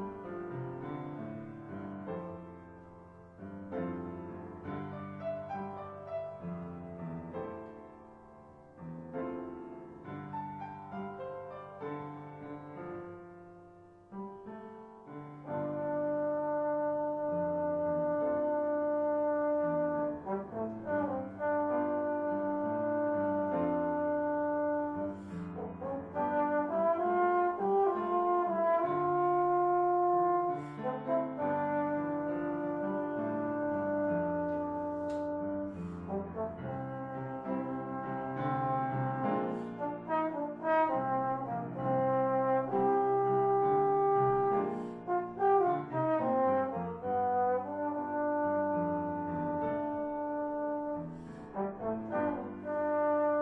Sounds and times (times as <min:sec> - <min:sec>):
Trombone: 0:15.3 - 0:53.4.